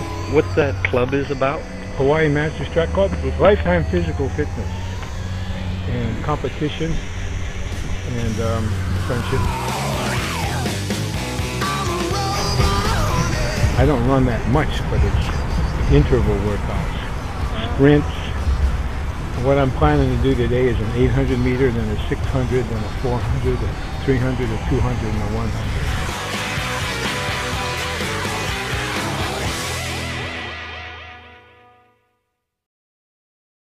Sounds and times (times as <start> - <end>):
Music: 0.0 - 14.5, 20.0 - 32.6
Male speech, man speaking: 0.3 - 4.7, 5.9 - 7.0, 8.1 - 9.6, 13.7 - 18.4, 19.4 - 25.7.